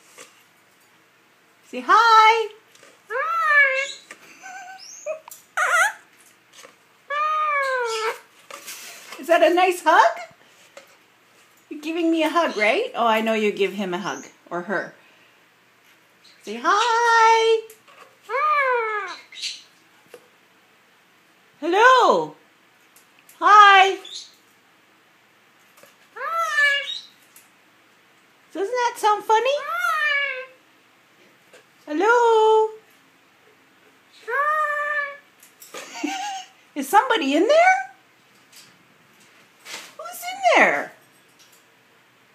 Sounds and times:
Inside, small room: 0.0s - 42.3s
Speech: 1.7s - 3.9s, 9.2s - 10.3s, 11.7s - 15.0s, 16.4s - 17.7s, 21.6s - 22.4s, 23.4s - 24.1s, 28.5s - 30.1s, 31.8s - 32.8s, 36.8s - 38.0s, 40.0s - 41.0s
Bird: 3.1s - 6.0s, 18.3s - 19.8s, 23.9s - 24.4s, 26.2s - 27.2s
Domestic animals, pets: 3.1s - 6.1s, 7.1s - 8.3s, 18.3s - 19.7s, 26.2s - 27.2s, 29.6s - 30.6s, 34.1s - 35.2s.

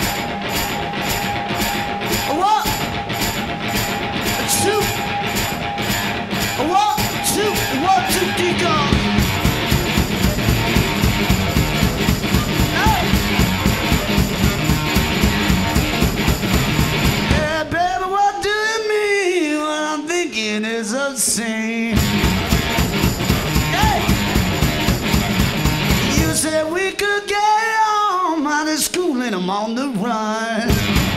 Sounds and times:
Music: 0.0s - 18.5s, 21.9s - 27.2s, 30.6s - 31.1s.

